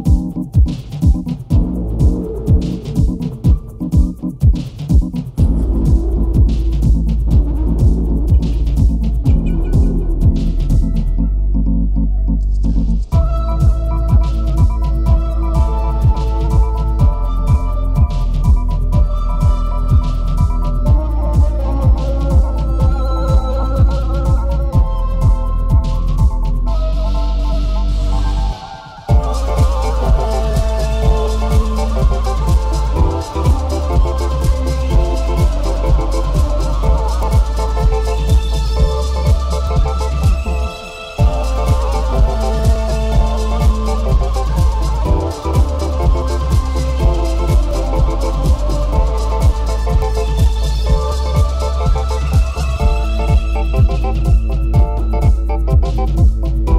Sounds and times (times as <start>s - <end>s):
Music: 0.0s - 56.7s.